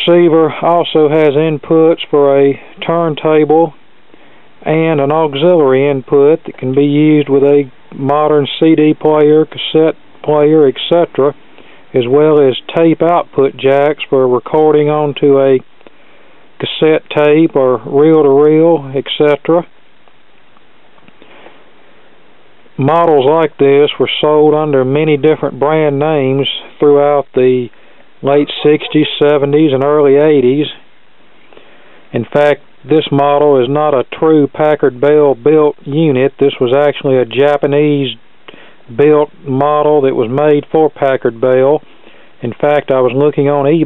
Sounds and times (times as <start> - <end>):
Speech: 0.0 - 3.8, 4.6 - 15.7, 16.6 - 19.7, 22.8 - 30.8, 32.1 - 38.2, 38.9 - 41.8, 42.4 - 43.8.